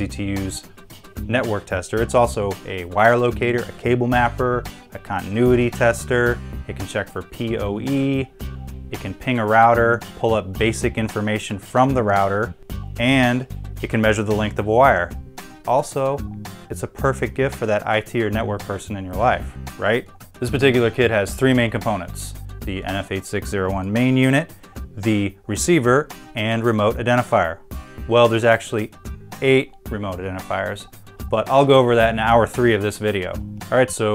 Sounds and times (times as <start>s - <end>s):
Speech: 0.0s - 8.3s, 8.9s - 34.1s
Music: 0.0s - 34.1s.